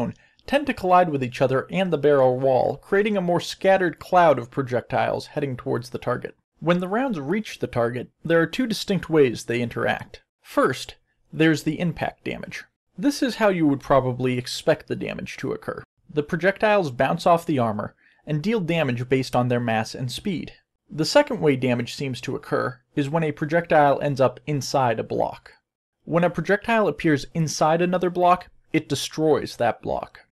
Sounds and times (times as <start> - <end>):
Speech: 0.0 - 30.3.